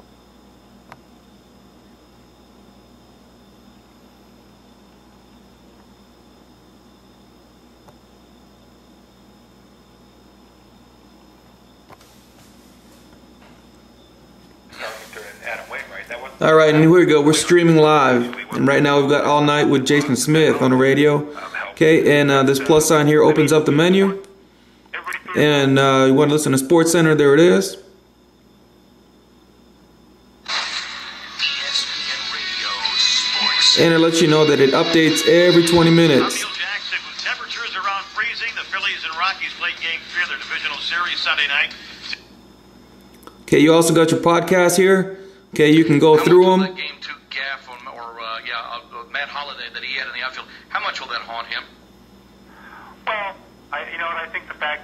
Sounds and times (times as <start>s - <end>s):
Speech: 14.8s - 24.2s, 25.0s - 27.9s, 31.6s - 42.0s, 43.5s - 51.8s, 53.1s - 54.8s.